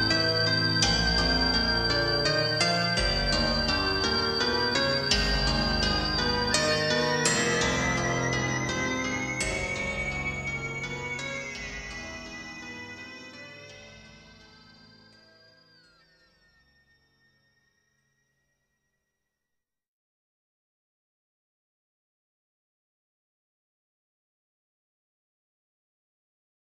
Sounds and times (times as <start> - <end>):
Music: 0.0 - 19.6.